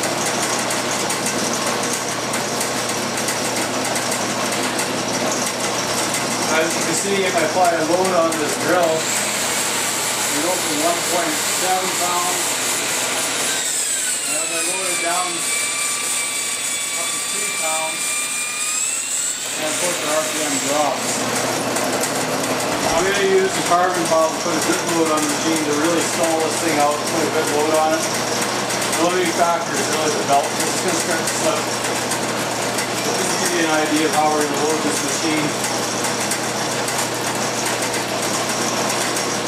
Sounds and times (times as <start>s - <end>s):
Engine: 0.0s - 39.4s
Speech: 6.5s - 9.0s, 10.3s - 12.5s, 14.3s - 15.5s, 17.0s - 18.0s, 19.6s - 21.2s, 22.8s - 28.1s, 29.0s - 31.7s, 33.1s - 35.6s.